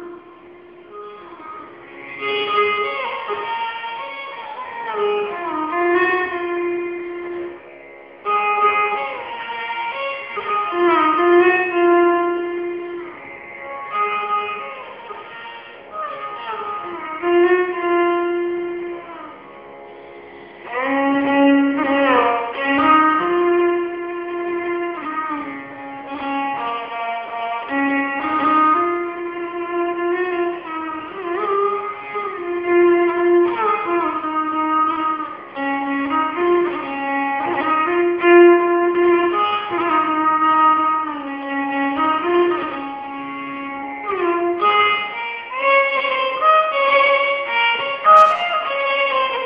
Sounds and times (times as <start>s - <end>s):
Violin, fiddle: 0.0s - 49.4s.